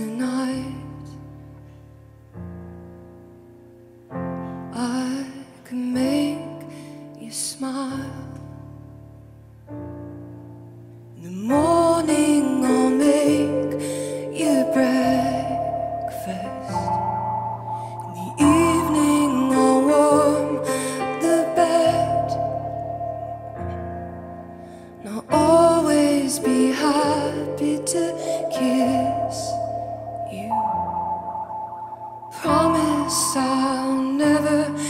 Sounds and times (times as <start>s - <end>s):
Music: 0.0s - 34.8s.